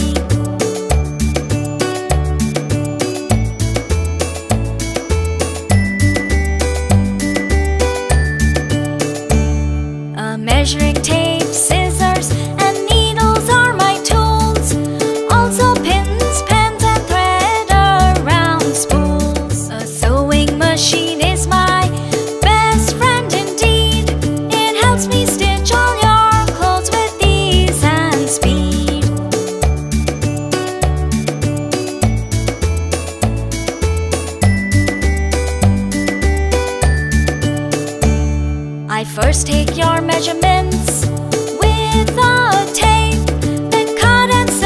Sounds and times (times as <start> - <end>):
Music for children: 0.0 - 44.6.